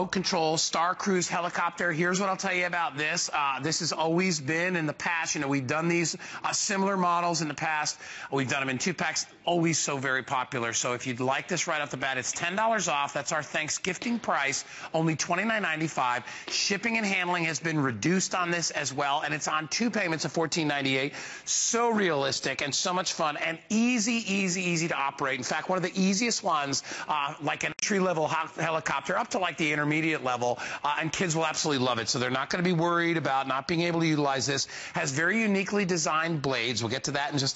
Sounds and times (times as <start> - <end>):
Speech: 0.0 - 37.5.